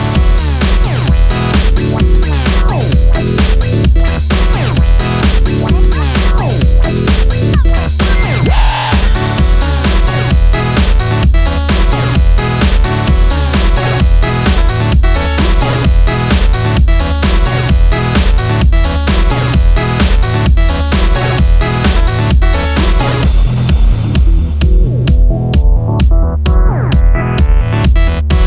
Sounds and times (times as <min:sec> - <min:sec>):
Synthesizer: 0:00.0 - 0:28.4.